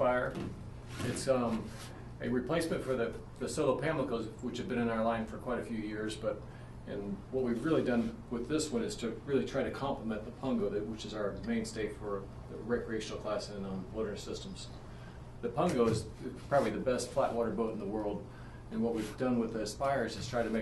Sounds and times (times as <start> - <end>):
Speech: 0.0 - 0.4, 1.0 - 14.8, 15.4 - 20.6.